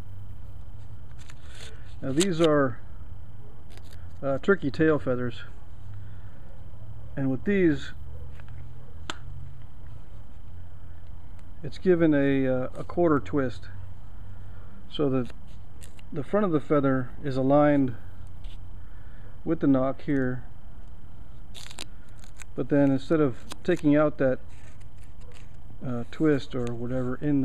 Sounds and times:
Speech: 0:02.0 - 0:02.8, 0:04.2 - 0:05.5, 0:07.2 - 0:08.0, 0:11.6 - 0:13.8, 0:14.9 - 0:15.3, 0:16.2 - 0:18.0, 0:19.5 - 0:20.5, 0:22.6 - 0:24.4, 0:25.8 - 0:27.4.

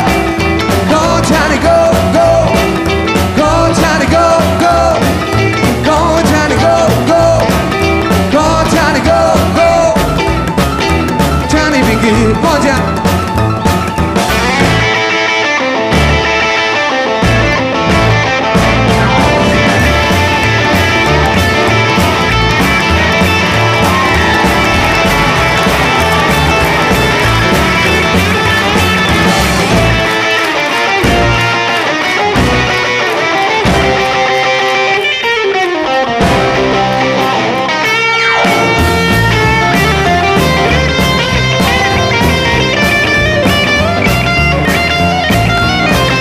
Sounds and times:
Double bass: 0:00.0 - 0:15.0, 0:17.2 - 0:30.2, 0:38.5 - 0:46.2
Rock music: 0:00.0 - 0:46.2.

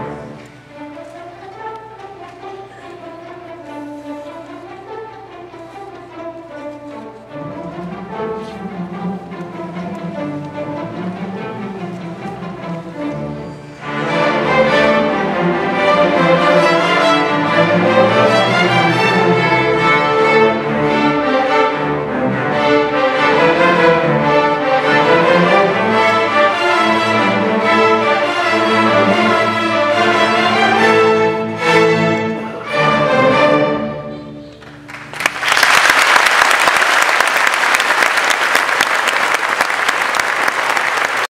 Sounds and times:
Bowed string instrument: 0:00.0 - 0:35.4
Classical music: 0:00.0 - 0:41.3
Orchestra: 0:00.0 - 0:41.3.

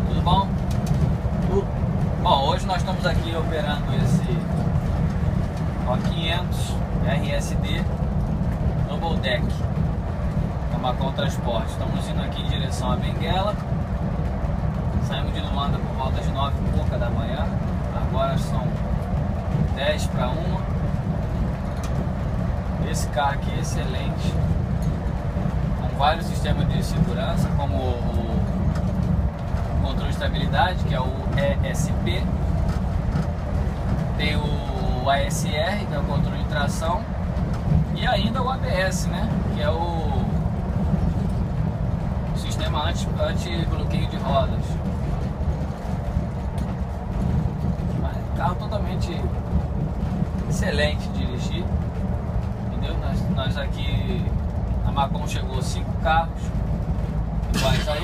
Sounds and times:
Speech: 0:00.0 - 0:00.5, 0:01.4 - 0:04.4, 0:05.8 - 0:07.9, 0:08.9 - 0:09.6, 0:10.7 - 0:13.6, 0:15.0 - 0:18.8, 0:19.8 - 0:20.7, 0:22.8 - 0:24.4, 0:25.8 - 0:28.5, 0:29.8 - 0:32.3, 0:34.2 - 0:37.1, 0:38.0 - 0:40.4, 0:42.4 - 0:44.9, 0:48.0 - 0:49.4, 0:50.5 - 0:51.7, 0:52.7 - 0:56.6, 0:57.6 - 0:58.0.

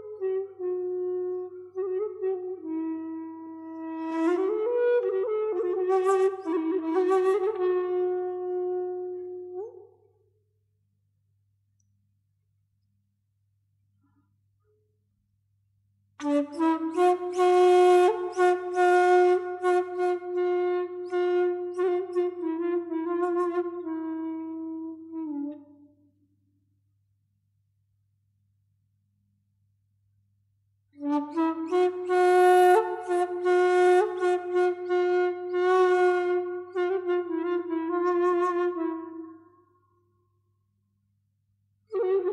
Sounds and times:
Flute: 0:00.0 - 0:10.2, 0:16.2 - 0:26.2, 0:30.9 - 0:40.0, 0:41.9 - 0:42.3.

